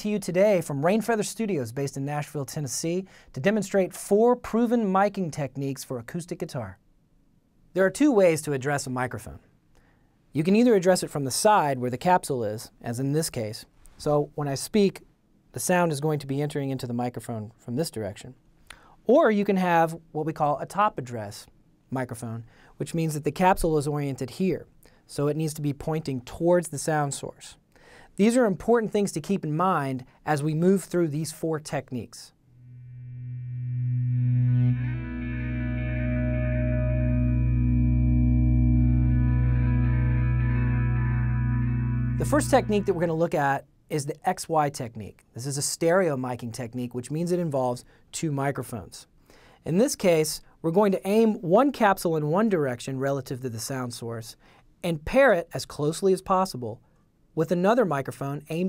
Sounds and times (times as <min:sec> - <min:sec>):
Speech: 0:00.0 - 0:06.8, 0:07.8 - 0:09.5, 0:10.3 - 0:18.4, 0:19.1 - 0:27.6, 0:28.2 - 0:32.4, 0:42.2 - 0:56.8, 0:57.4 - 0:58.6.